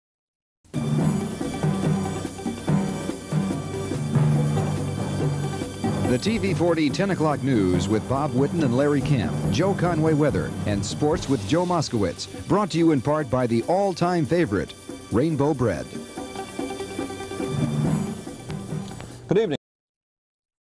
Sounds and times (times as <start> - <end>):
Music: 0.7 - 19.6
Speech: 6.1 - 16.0, 19.3 - 19.6.